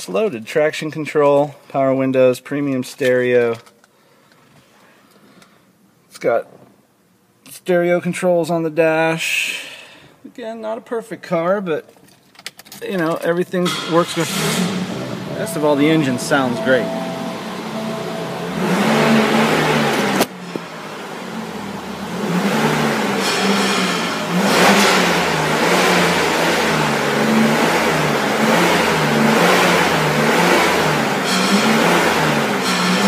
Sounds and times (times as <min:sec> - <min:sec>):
Car: 0:13.6 - 0:33.0.